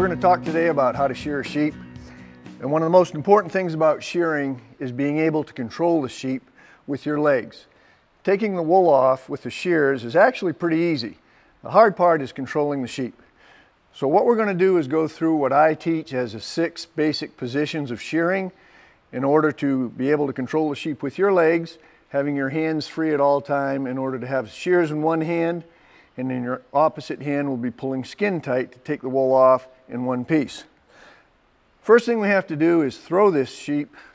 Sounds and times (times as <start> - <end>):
Speech: 0.0 - 1.8, 2.6 - 13.2, 14.0 - 30.8, 31.8 - 34.0.